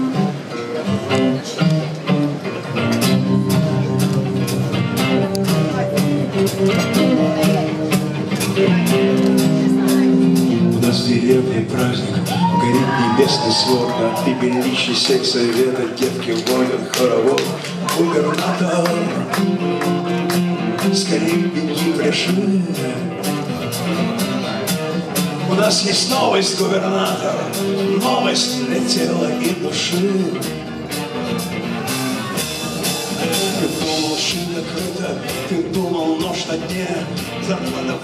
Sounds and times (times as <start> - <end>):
Music: 0.0 - 38.0.